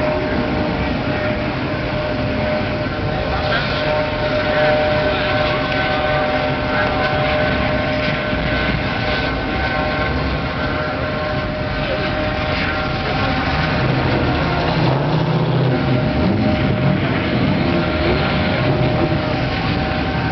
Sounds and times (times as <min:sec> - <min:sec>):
Car: 0:00.0 - 0:20.3.